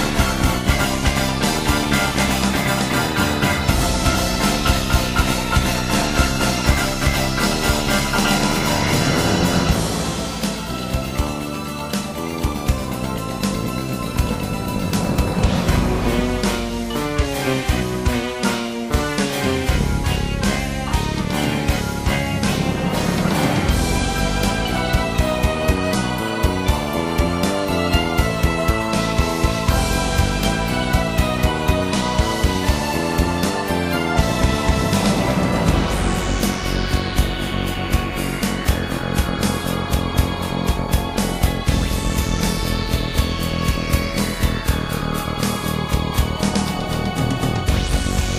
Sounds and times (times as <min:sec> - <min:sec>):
Music: 0:00.0 - 0:48.3.